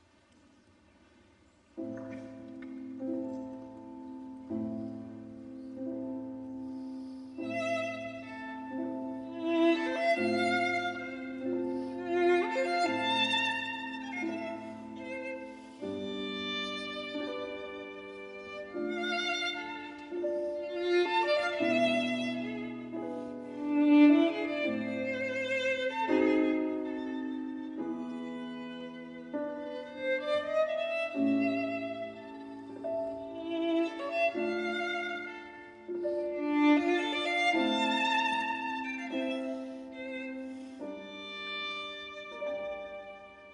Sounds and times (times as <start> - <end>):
Cello: 1.5 - 43.5
Violin, fiddle: 1.8 - 43.5.